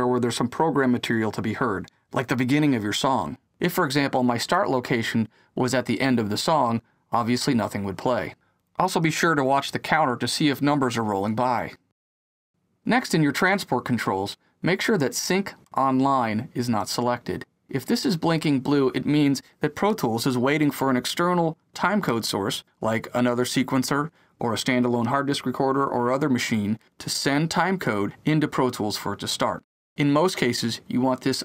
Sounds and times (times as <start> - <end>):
Speech: 0.0 - 11.9, 12.9 - 31.4.